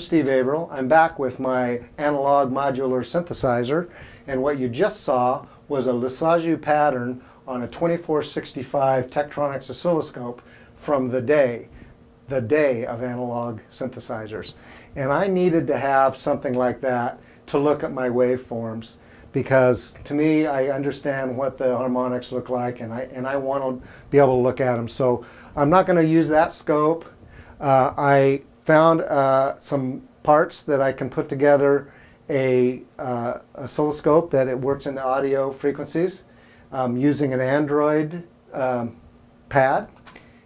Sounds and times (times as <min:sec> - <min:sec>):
Speech: 0:00.0 - 0:40.0.